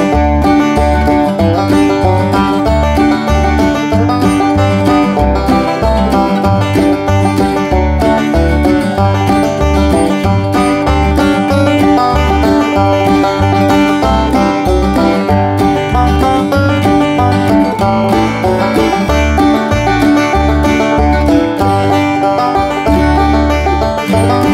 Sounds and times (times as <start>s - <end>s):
Music: 0.0s - 24.5s.